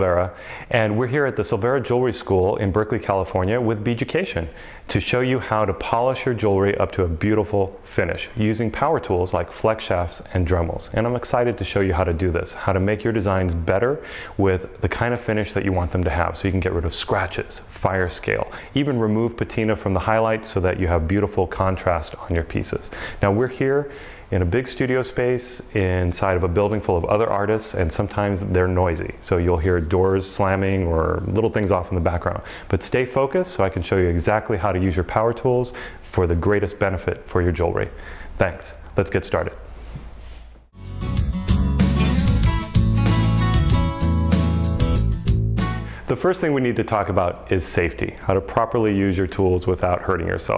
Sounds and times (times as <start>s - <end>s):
Speech: 0.0s - 39.7s, 46.1s - 50.5s.